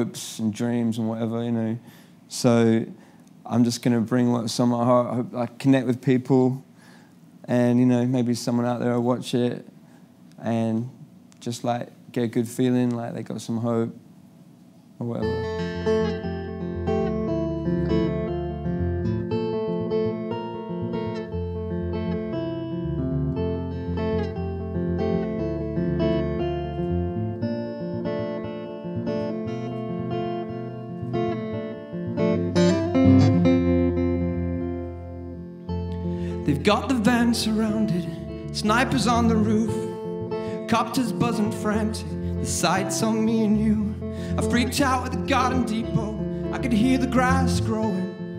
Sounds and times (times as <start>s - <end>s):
Guitar: 0.0s - 48.3s.